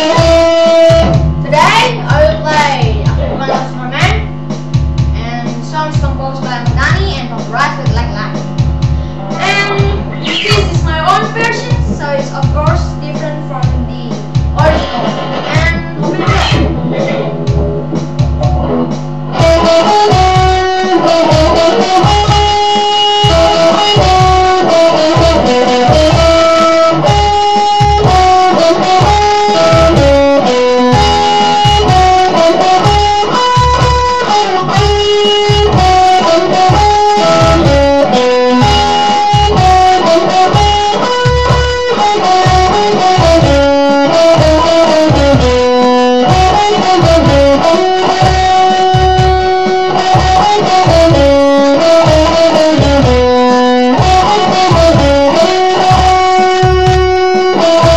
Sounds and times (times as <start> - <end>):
Acoustic guitar: 0.0 - 57.9
Strum: 0.0 - 57.9.